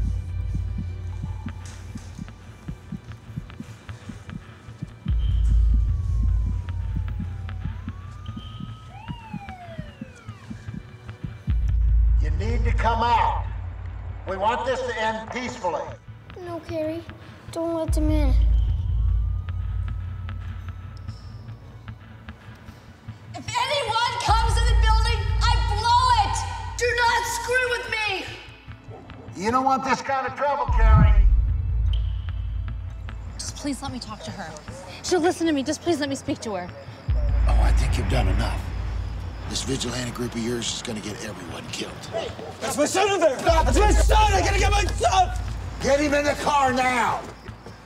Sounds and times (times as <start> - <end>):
Music: 0.0 - 47.8.